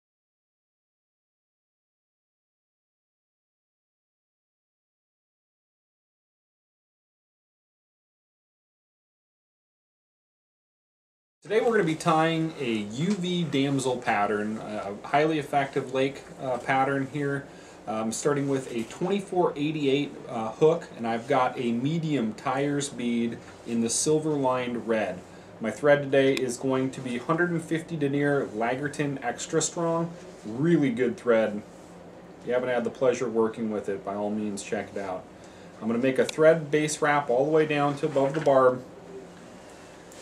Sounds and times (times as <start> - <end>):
Speech: 11.5 - 31.7, 32.4 - 38.9.